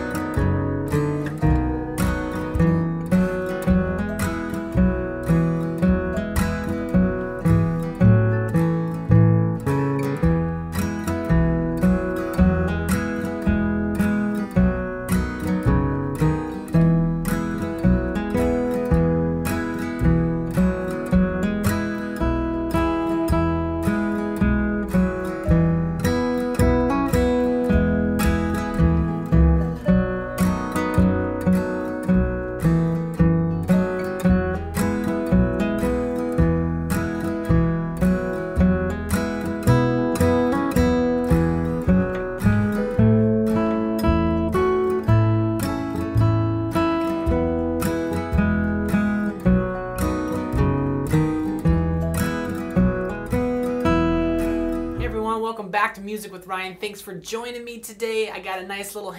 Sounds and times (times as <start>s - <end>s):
Strum: 0.0s - 57.7s
Acoustic guitar: 0.0s - 59.1s.